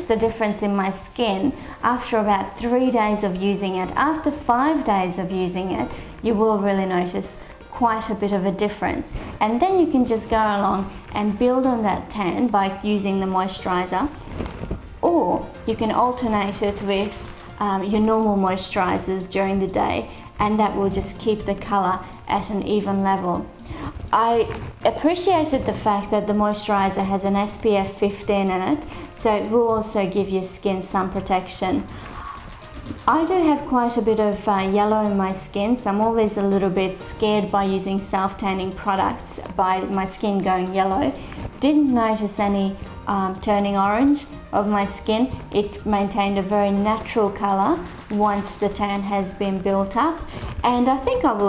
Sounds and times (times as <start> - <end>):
Speech: 0.0 - 14.2, 15.0 - 23.5, 24.1 - 31.9, 33.0 - 51.4
Music: 0.0 - 51.4.